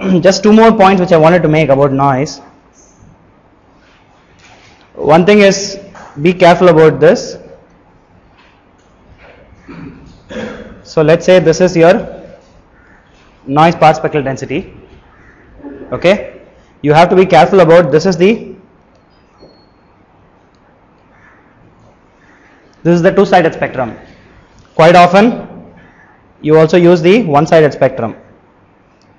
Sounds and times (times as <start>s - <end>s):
Speech: 0.0s - 2.5s, 5.0s - 7.6s, 10.9s - 12.4s, 13.5s - 14.8s, 15.6s - 18.6s, 22.8s - 24.1s, 24.8s - 25.6s, 26.4s - 28.3s.